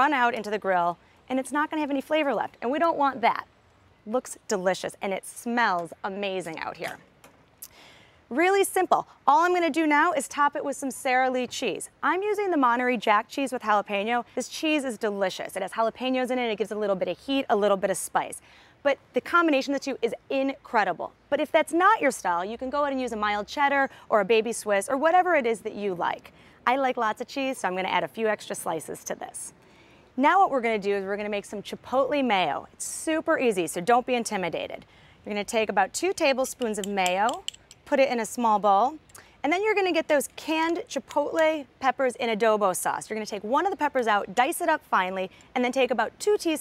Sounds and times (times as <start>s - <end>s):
Speech: 0.0s - 3.5s, 4.1s - 7.0s, 8.3s - 29.5s, 30.2s - 46.6s.